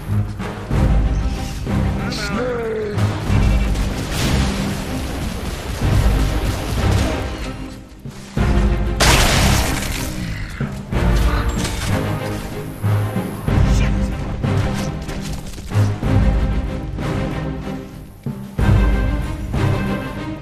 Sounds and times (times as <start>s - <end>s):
Music: 0.0s - 20.4s
Speech: 2.0s - 3.1s, 13.6s - 14.2s.